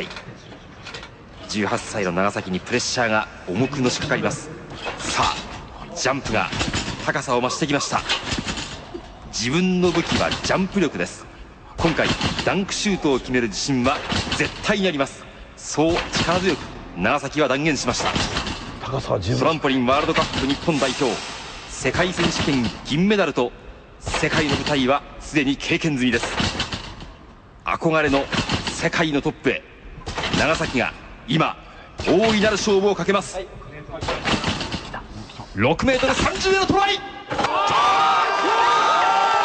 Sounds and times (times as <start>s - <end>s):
Speech: 1.4s - 8.1s, 11.8s - 18.2s, 18.8s - 21.2s, 24.1s - 26.3s, 30.4s - 34.2s, 35.5s - 37.1s.